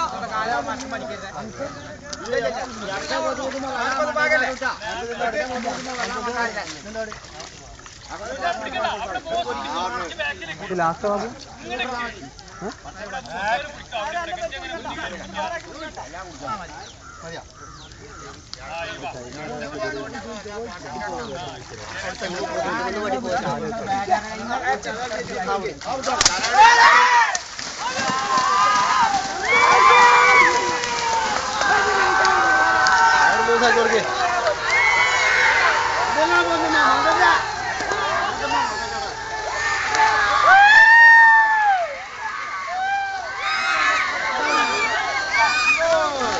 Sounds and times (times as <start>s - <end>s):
Speech: 0.0s - 30.5s, 31.6s - 34.8s
Outside, rural or natural: 0.0s - 46.3s.